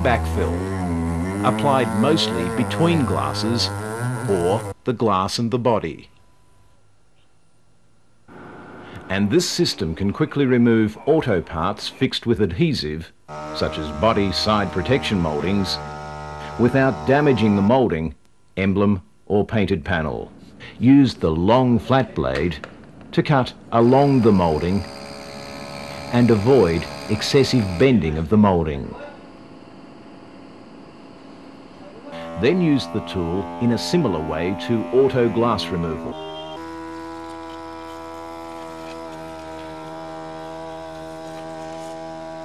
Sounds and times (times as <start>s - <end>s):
Speech: 0.0s - 0.8s, 1.4s - 6.1s, 9.1s - 15.8s, 16.6s - 22.6s, 23.2s - 24.9s, 26.1s - 29.2s, 31.9s - 36.2s.